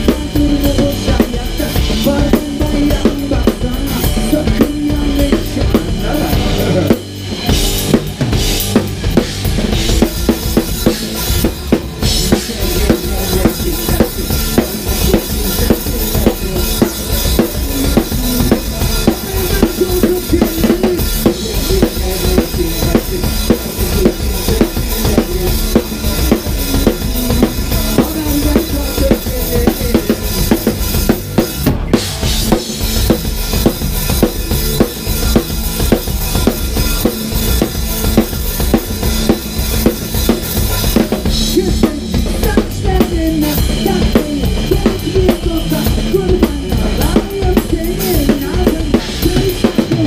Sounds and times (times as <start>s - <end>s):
Bass drum: 0.0s - 50.0s
Drum kit: 0.0s - 50.0s.